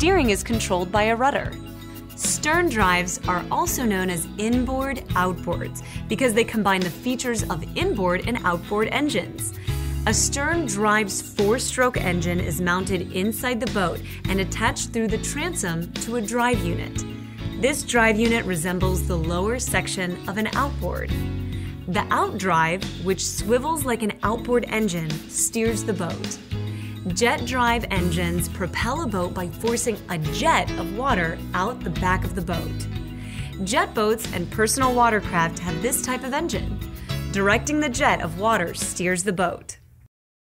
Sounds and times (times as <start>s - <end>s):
Speech: 0.0s - 1.5s, 2.2s - 17.0s, 17.6s - 21.1s, 21.9s - 26.4s, 27.1s - 32.9s, 33.6s - 36.7s, 37.3s - 39.8s
Music: 0.0s - 40.1s.